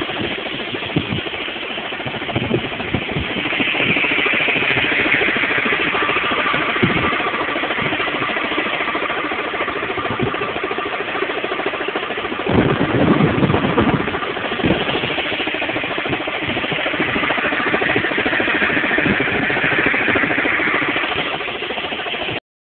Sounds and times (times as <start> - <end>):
Idling: 0.1 - 22.4.